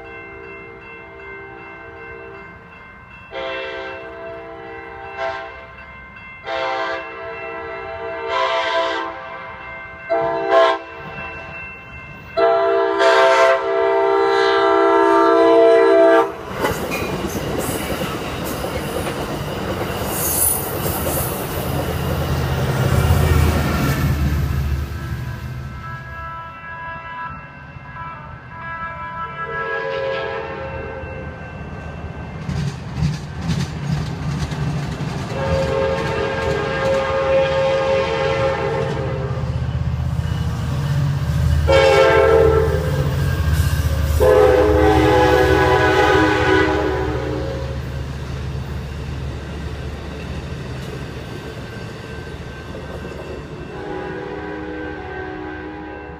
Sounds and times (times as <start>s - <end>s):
Railroad car, train wagon: 0.0s - 56.1s
Train horn: 3.3s - 5.7s, 6.4s - 11.1s, 12.4s - 16.5s, 25.0s - 31.4s, 35.3s - 39.5s, 41.6s - 48.0s, 53.7s - 56.1s
Clickety-clack: 16.5s - 22.5s, 32.4s - 37.3s.